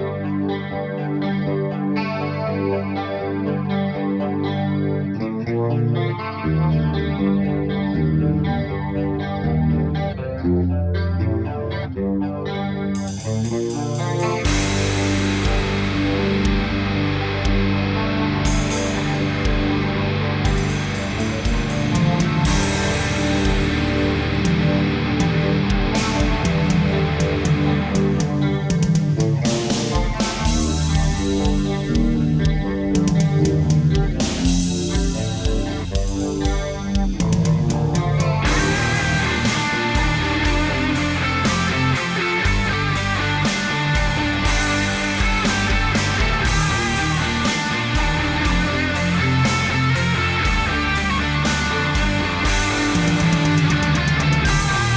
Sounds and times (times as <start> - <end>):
Electric guitar: 0.0 - 54.9.